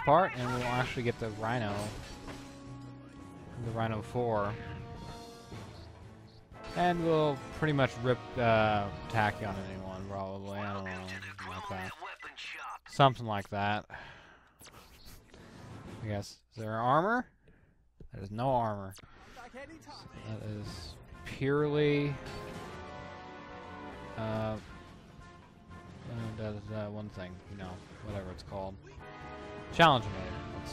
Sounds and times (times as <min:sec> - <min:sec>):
Speech: 0:00.0 - 0:01.9, 0:03.6 - 0:04.6, 0:06.8 - 0:13.9, 0:16.0 - 0:17.3, 0:18.1 - 0:22.2, 0:24.2 - 0:24.6, 0:26.1 - 0:29.0, 0:29.8 - 0:30.4
Music: 0:00.0 - 0:12.7, 0:19.0 - 0:30.7.